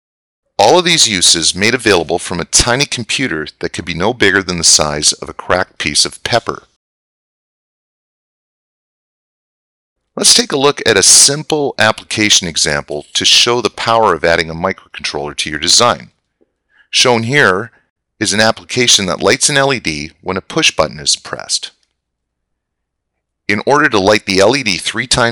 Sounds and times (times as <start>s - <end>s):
Speech: 0.6s - 6.8s, 10.2s - 16.1s, 16.9s - 21.8s, 23.5s - 25.3s.